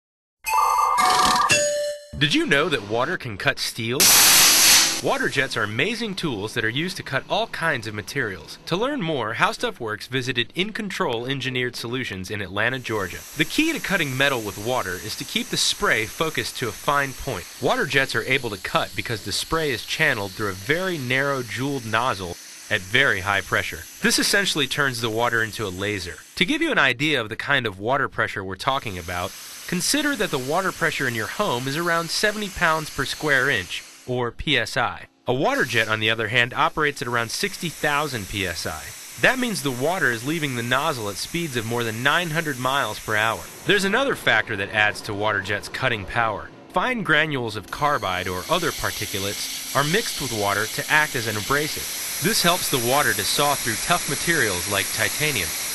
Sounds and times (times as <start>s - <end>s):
Music: 0.4s - 2.5s
Speech: 2.2s - 4.1s, 5.0s - 55.6s.